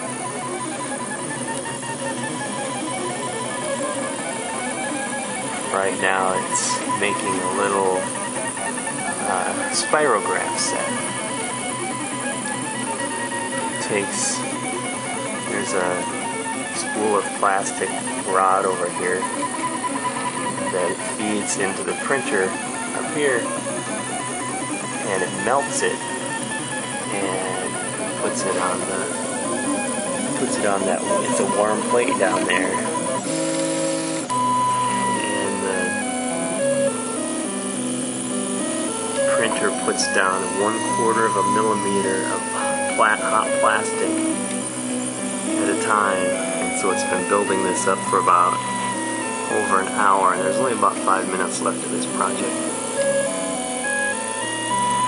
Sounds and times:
Music: 0.0s - 55.0s
Speech: 5.7s - 8.2s, 9.2s - 11.1s, 13.8s - 14.5s, 15.5s - 19.3s, 20.7s - 23.5s, 25.0s - 26.0s, 27.1s - 29.2s, 30.4s - 32.9s, 35.2s - 36.0s, 39.3s - 44.2s, 45.6s - 48.6s, 49.5s - 52.8s.

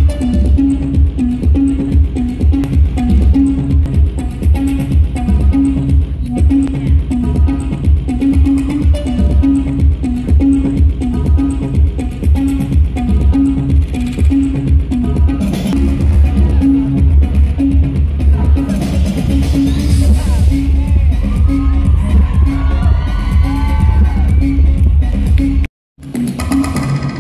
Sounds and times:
Music: 0.0s - 27.2s
Cheering: 21.1s - 24.8s.

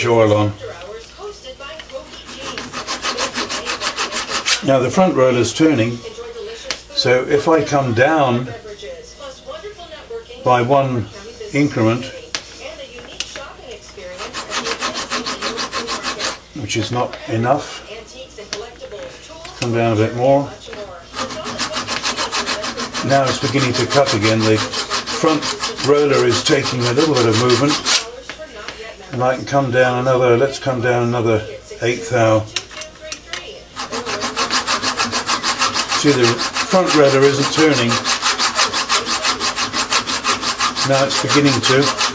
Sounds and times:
Rub: 1.9s - 4.8s, 14.0s - 17.2s, 20.7s - 28.2s, 33.8s - 42.1s
Filing (rasp): 2.1s - 4.8s, 14.0s - 16.4s, 21.1s - 28.1s, 33.8s - 42.1s.

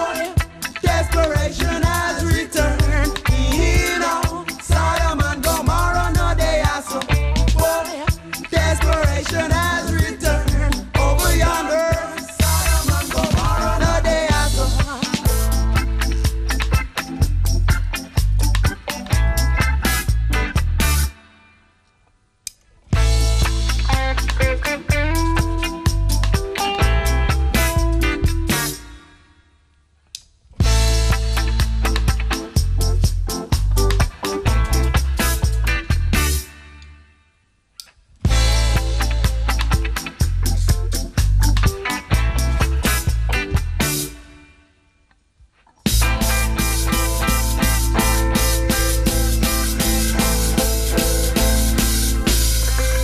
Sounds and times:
Music of Africa: 0.0s - 21.2s, 23.0s - 29.0s, 38.3s - 44.3s, 45.9s - 53.0s.

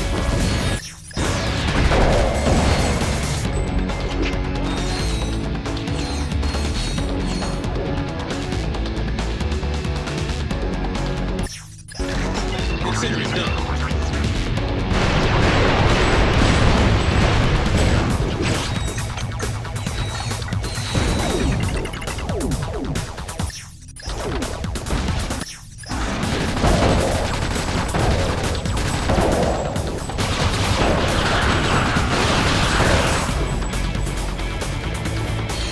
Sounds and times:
Music: 0.0s - 35.7s.

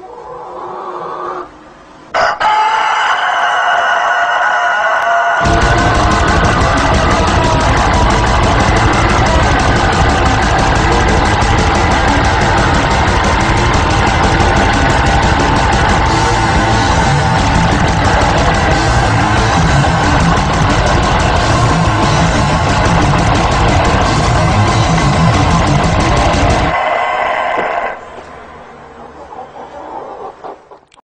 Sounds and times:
Chicken, rooster: 0.0s - 5.5s, 26.7s - 31.0s
Music: 5.4s - 26.8s.

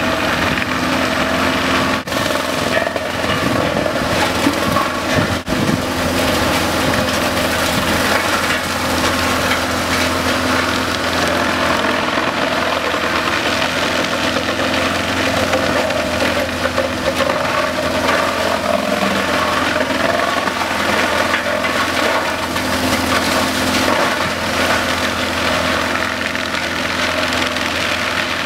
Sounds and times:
Vehicle: 0.0s - 28.4s.

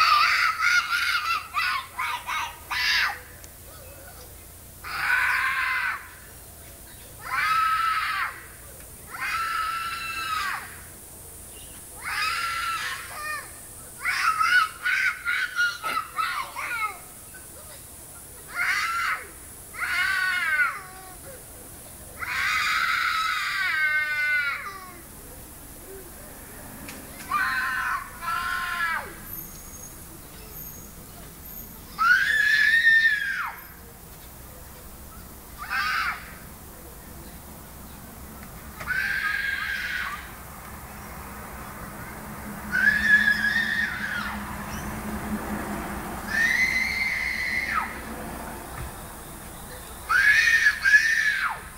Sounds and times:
Screaming: 0.0s - 3.3s, 4.8s - 6.2s, 7.2s - 8.5s, 9.1s - 10.8s, 12.0s - 17.0s, 18.5s - 21.0s, 22.2s - 25.0s, 27.3s - 29.3s, 31.9s - 33.8s, 35.6s - 36.4s, 38.8s - 40.4s, 42.7s - 44.5s, 46.3s - 48.1s, 50.1s - 51.7s.

